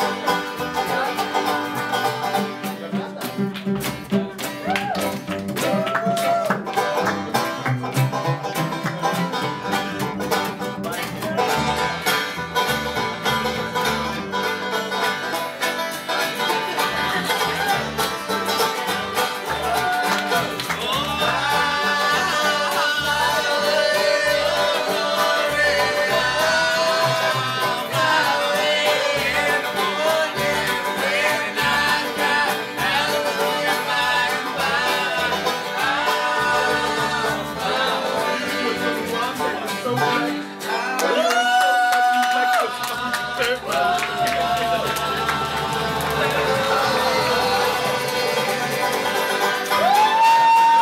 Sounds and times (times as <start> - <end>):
Banjo: 0.0 - 50.8
Bluegrass: 0.0 - 50.8
Speech: 2.6 - 3.5, 10.7 - 11.6, 39.0 - 44.9
Singing: 19.5 - 50.8.